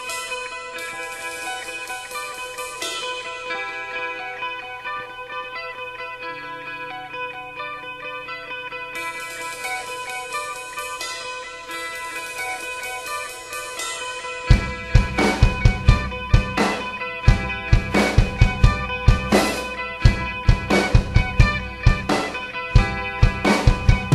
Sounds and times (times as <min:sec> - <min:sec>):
Music: 0:00.0 - 0:24.1.